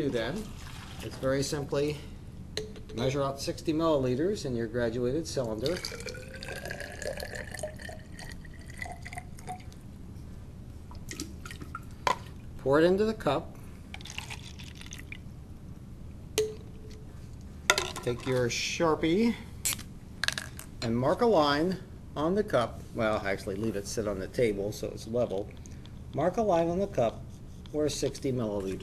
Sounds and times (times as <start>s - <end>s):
Speech: 0.0s - 2.1s, 3.0s - 5.8s, 12.6s - 13.5s, 18.0s - 19.4s, 20.8s - 25.5s, 26.2s - 28.8s
Water: 0.3s - 1.2s, 5.6s - 9.6s.